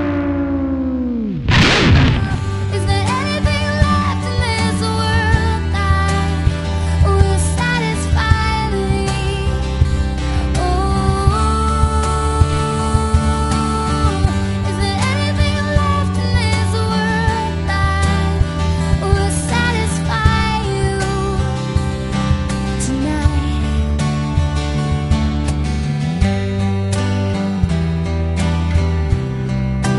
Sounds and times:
Blues: 0.0s - 29.9s.

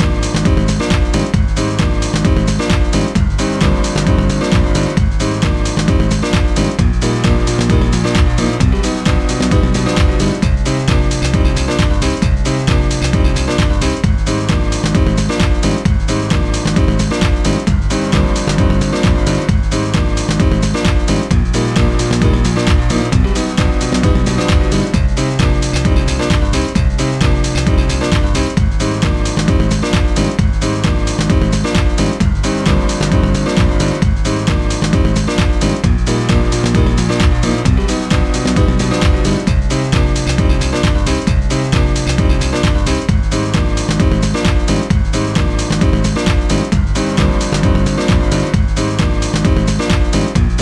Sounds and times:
Music: 0.0s - 50.6s.

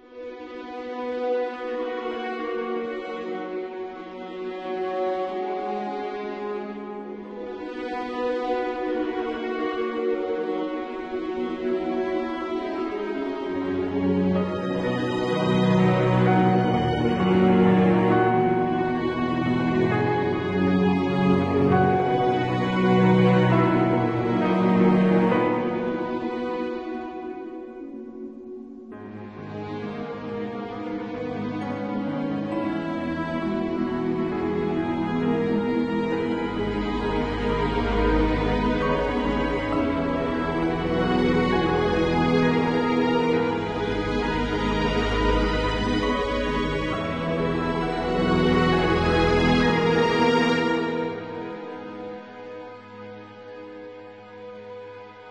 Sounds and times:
Music: 0.0s - 55.3s.

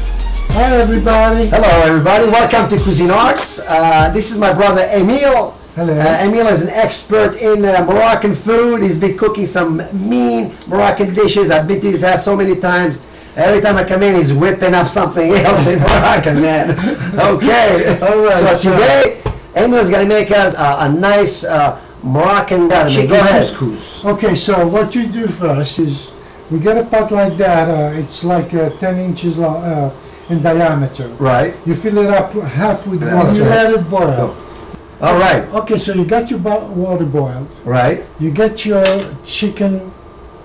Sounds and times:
Speech: 0.5s - 34.4s, 35.0s - 40.0s.

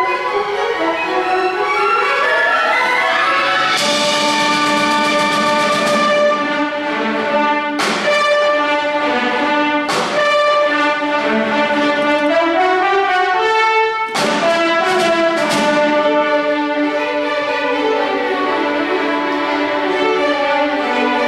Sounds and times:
Inside, large room or hall: 0.0s - 21.2s
Orchestra: 0.0s - 21.2s.

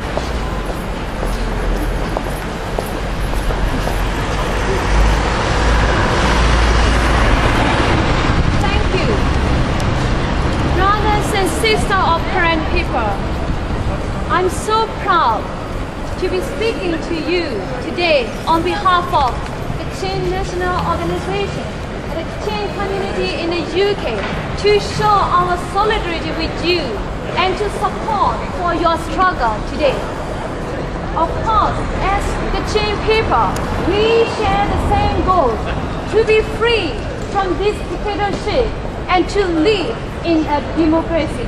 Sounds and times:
Female speech, woman speaking: 8.6s - 9.3s, 10.8s - 13.2s, 14.3s - 15.5s, 16.2s - 30.1s, 31.2s - 41.4s.

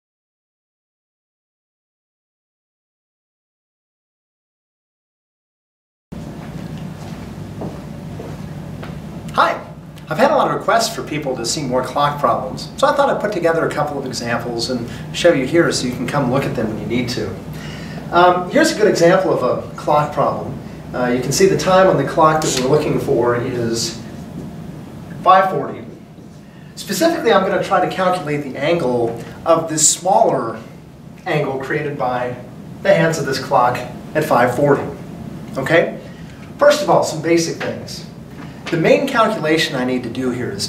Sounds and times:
Speech: 9.3s - 17.4s, 18.1s - 24.1s, 25.2s - 26.0s, 26.8s - 35.0s, 35.6s - 36.0s, 36.6s - 40.6s.

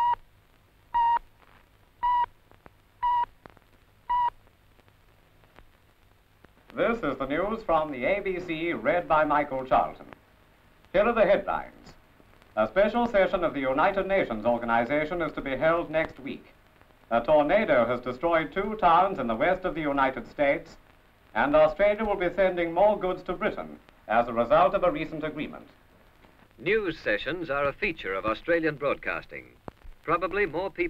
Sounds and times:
Speech: 6.7s - 10.1s, 11.0s - 12.0s, 12.6s - 20.8s, 21.4s - 25.8s, 26.6s - 30.8s.

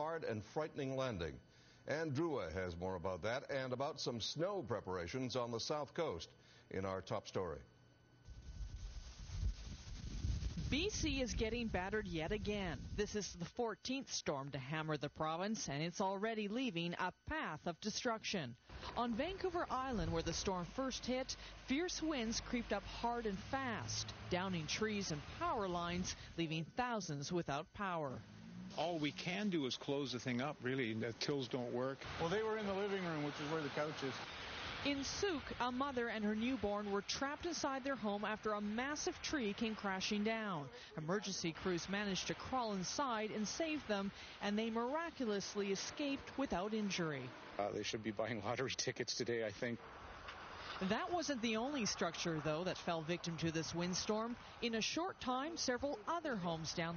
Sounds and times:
Speech: 0.0s - 7.7s, 10.7s - 28.2s, 28.8s - 34.2s, 34.9s - 49.8s, 50.8s - 56.9s.

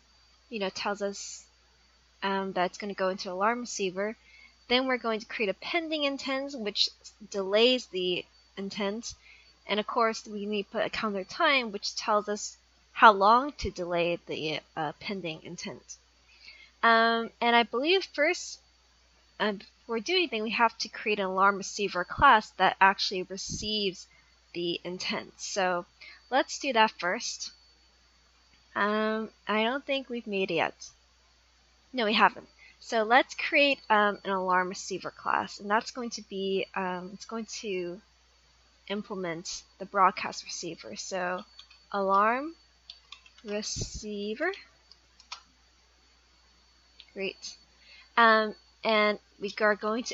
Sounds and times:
Speech: 0.5s - 1.4s, 2.2s - 16.0s, 16.8s - 18.6s, 19.4s - 24.0s, 24.6s - 27.5s, 28.8s - 30.9s, 32.0s - 38.0s, 38.9s - 42.6s, 43.5s - 44.6s, 47.2s - 47.5s, 48.2s - 50.1s.

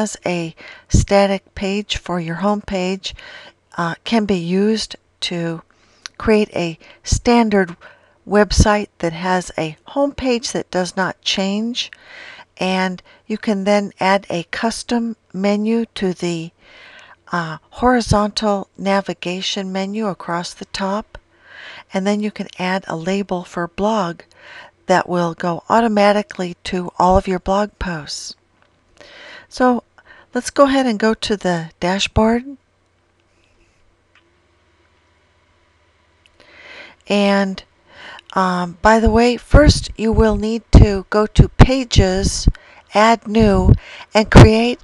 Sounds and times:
Speech: 0.0s - 3.2s, 3.8s - 12.0s, 12.6s - 16.6s, 17.3s - 21.2s, 21.9s - 24.3s, 24.9s - 28.4s, 29.5s - 32.6s, 37.1s - 37.7s, 38.3s - 44.8s.

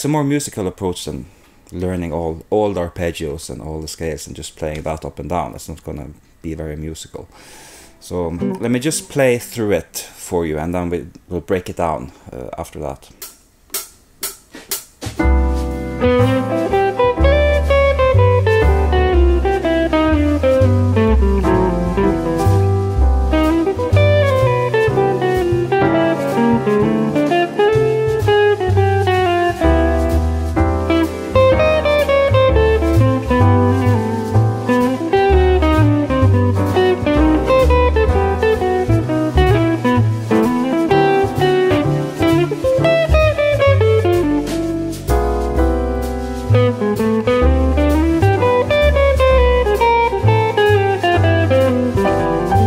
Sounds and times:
Inside, small room: 0.0s - 52.6s
Guitar: 7.7s - 9.6s, 15.2s - 52.6s.

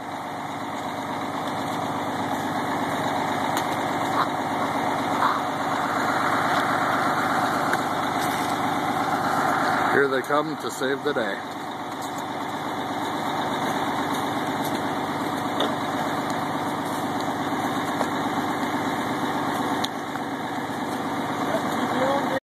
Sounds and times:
Truck: 0.0s - 22.4s
Speech: 9.9s - 11.4s, 21.4s - 22.4s.

